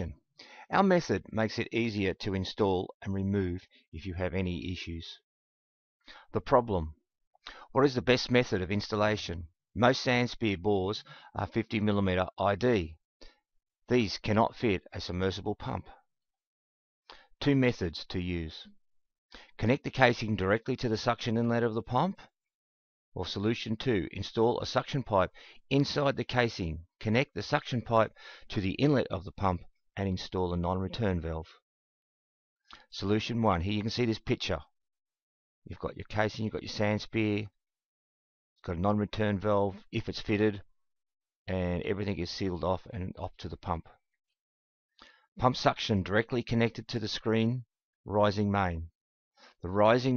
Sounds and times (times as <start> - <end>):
Speech: 0.0 - 5.3, 6.3 - 7.0, 7.7 - 13.0, 13.9 - 16.0, 17.4 - 18.8, 19.6 - 22.3, 23.2 - 31.6, 32.8 - 34.7, 35.7 - 37.6, 38.6 - 40.7, 41.5 - 44.0, 45.4 - 48.9, 49.6 - 50.1.